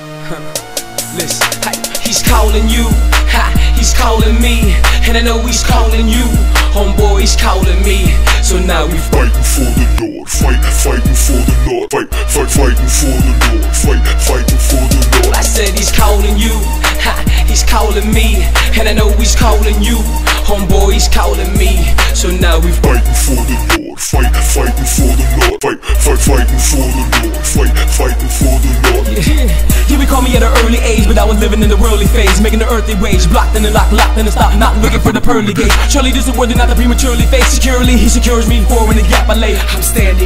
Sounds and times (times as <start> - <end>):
Rhythm and blues: 0.0 - 40.2.